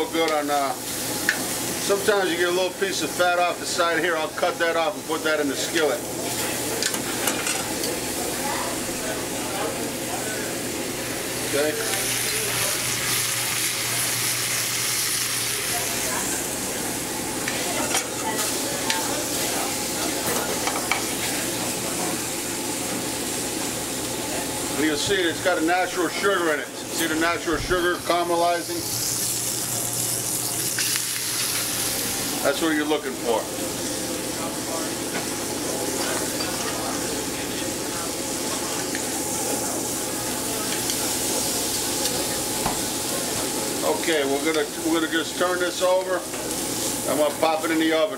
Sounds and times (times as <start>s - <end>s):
Speech: 0.0s - 0.8s, 1.8s - 7.1s, 7.9s - 10.7s, 11.4s - 16.9s, 17.5s - 22.3s, 24.2s - 28.9s, 32.4s - 33.6s, 34.2s - 48.1s.